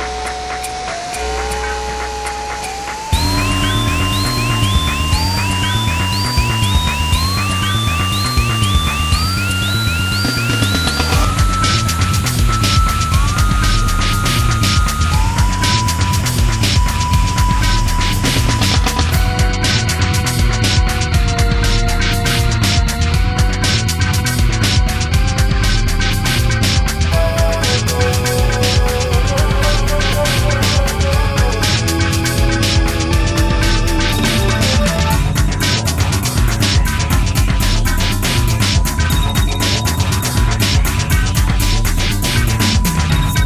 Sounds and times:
Music: 0.0 - 43.4.

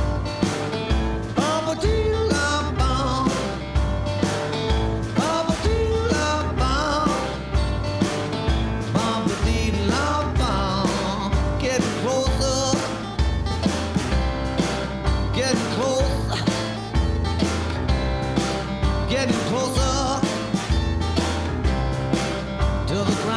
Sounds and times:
Rhythm and blues: 0.0 - 23.3.

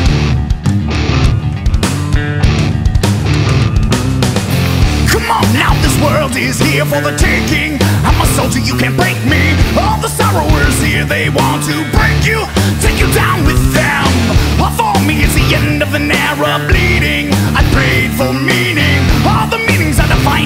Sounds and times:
Music: 0.0 - 20.4.

